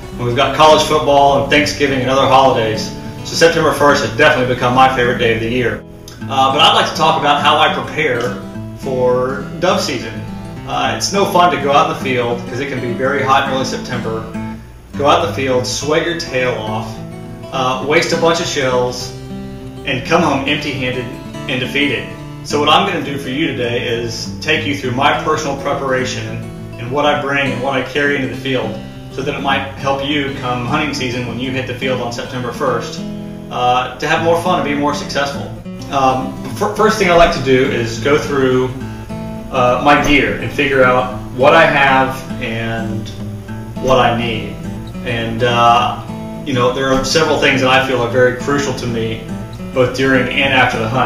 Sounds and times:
Speech: 0:00.0 - 0:14.4, 0:15.0 - 0:19.2, 0:19.8 - 0:38.8, 0:39.5 - 0:43.2, 0:43.8 - 0:51.0
Music: 0:00.0 - 0:51.0.

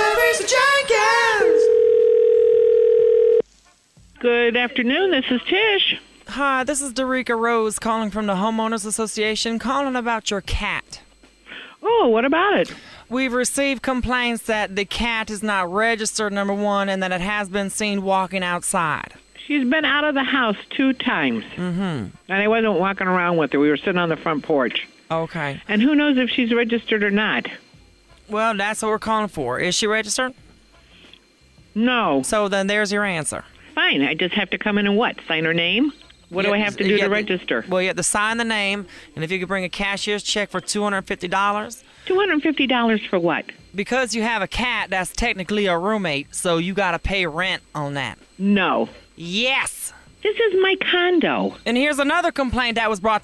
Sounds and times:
Speech: 0:31.8 - 0:53.2.

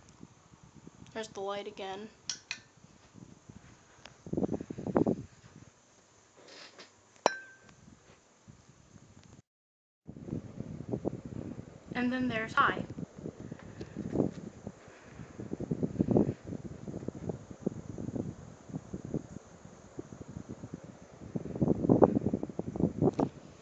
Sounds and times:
Mechanical fan: 0:00.0 - 0:09.4, 0:10.1 - 0:23.6
Speech: 0:01.1 - 0:02.2, 0:12.0 - 0:12.9.

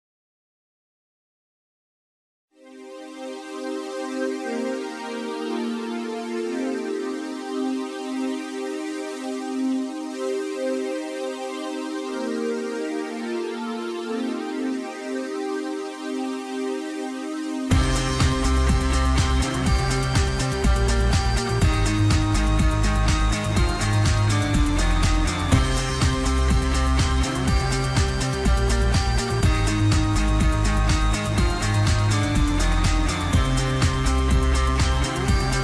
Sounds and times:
Music: 0:02.5 - 0:35.6.

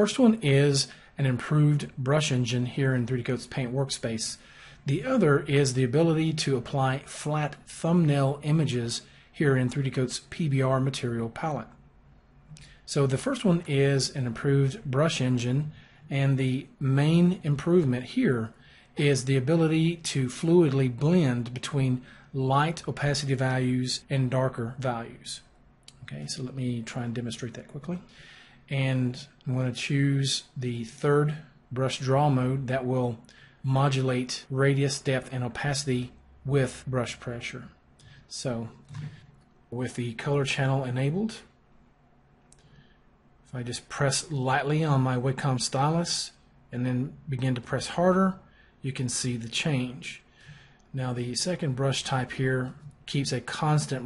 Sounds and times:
Speech: 0:00.0 - 0:11.8, 0:12.6 - 0:41.6, 0:43.5 - 0:50.3, 0:50.9 - 0:54.0.

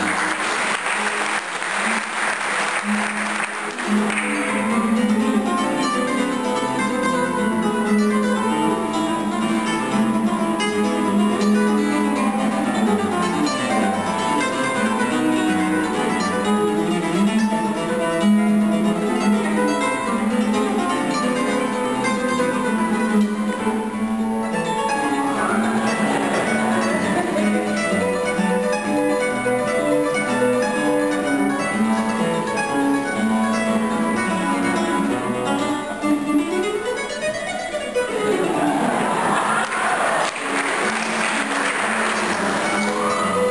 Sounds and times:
Strum: 0:02.6 - 0:39.5.

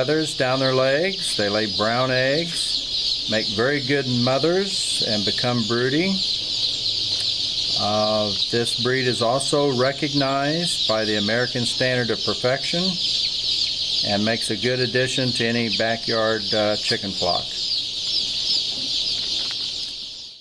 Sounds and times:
Speech: 0:00.0 - 0:06.2, 0:07.8 - 0:13.1, 0:14.0 - 0:17.6.

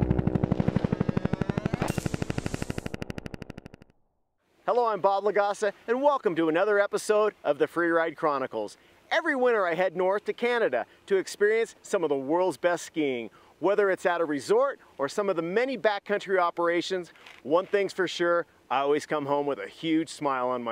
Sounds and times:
Outside, rural or natural: 0:00.0 - 0:20.7
Speech: 0:04.7 - 0:20.7.

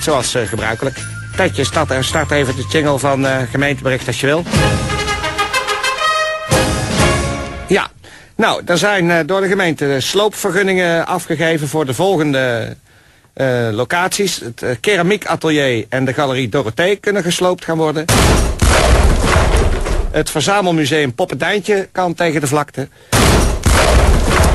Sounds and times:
Speech: 0:00.0 - 0:04.5, 0:07.7 - 0:12.8, 0:13.4 - 0:18.1, 0:20.2 - 0:22.9
Music: 0:00.0 - 0:07.8.

